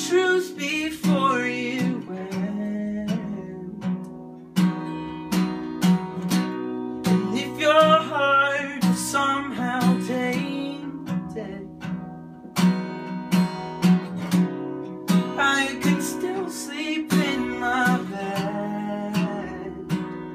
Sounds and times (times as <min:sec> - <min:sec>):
Music: 0:00.0 - 0:20.3.